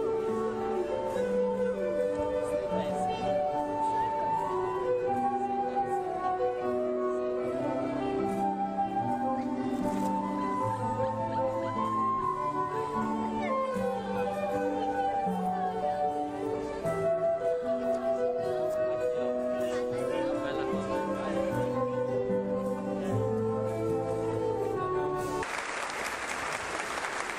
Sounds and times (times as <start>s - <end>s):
Music: 0.0s - 25.5s
Speech: 17.7s - 23.6s.